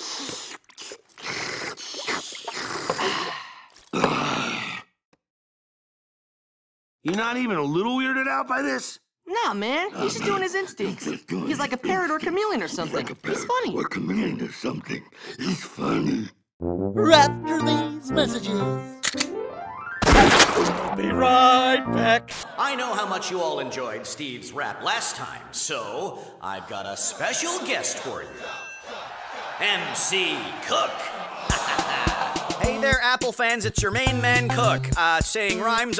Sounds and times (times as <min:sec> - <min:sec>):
Speech: 0:07.1 - 0:15.0, 0:21.0 - 0:28.5, 0:32.6 - 0:35.9
Music: 0:16.6 - 0:20.0, 0:20.7 - 0:22.4, 0:31.5 - 0:35.9.